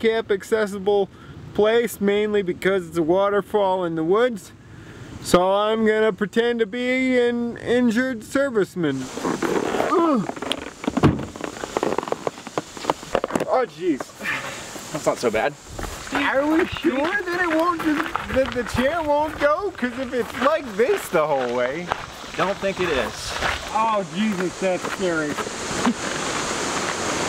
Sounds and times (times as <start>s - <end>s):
Male speech, man speaking: 0.0s - 4.6s, 5.2s - 9.1s, 13.4s - 14.1s, 14.9s - 25.4s.